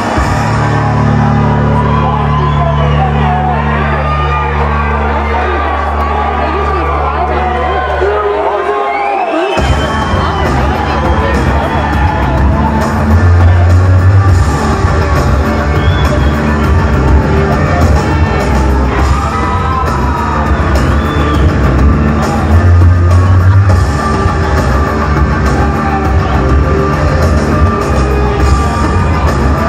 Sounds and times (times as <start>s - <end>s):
Inside, large room or hall: 0.0s - 29.6s
Music: 0.0s - 29.6s.